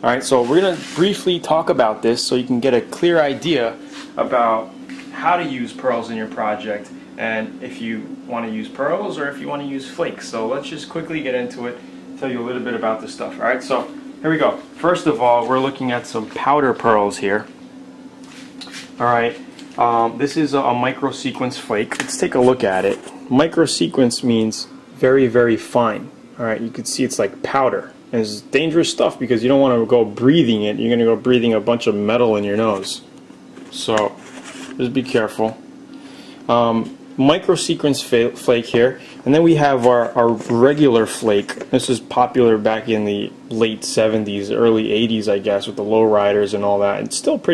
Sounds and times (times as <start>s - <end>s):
Speech: 0.0s - 17.5s, 19.0s - 33.1s, 33.7s - 35.6s, 36.5s - 47.5s.